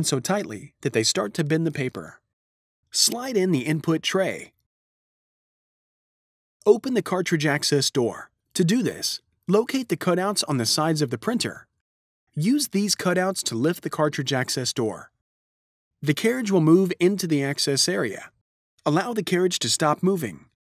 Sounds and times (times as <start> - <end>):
Speech: 0.0 - 2.2, 3.0 - 4.6, 6.6 - 11.7, 12.4 - 15.2, 16.0 - 20.6.